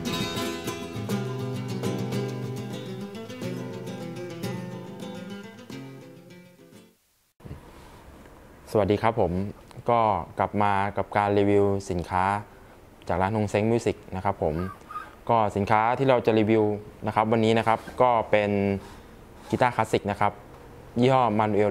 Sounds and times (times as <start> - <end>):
Music: 0.0 - 7.0
Speech: 8.7 - 12.5, 13.1 - 18.8, 19.5 - 20.4, 21.0 - 21.7.